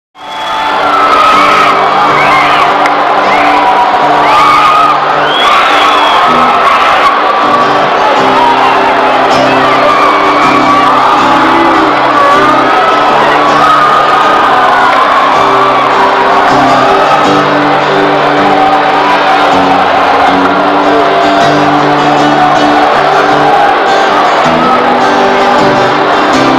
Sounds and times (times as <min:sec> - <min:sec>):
Crowd: 0:00.1 - 0:26.5
Music: 0:00.2 - 0:26.5.